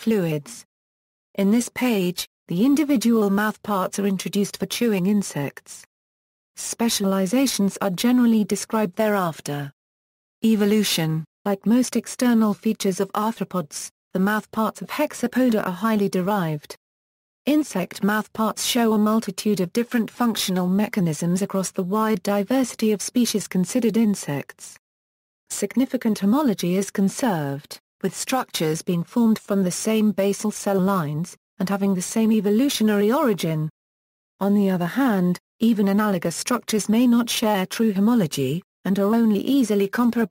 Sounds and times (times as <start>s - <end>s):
Speech: 0.0s - 0.7s, 1.4s - 5.9s, 6.6s - 9.8s, 10.4s - 16.8s, 17.5s - 24.8s, 25.5s - 33.7s, 34.4s - 40.3s.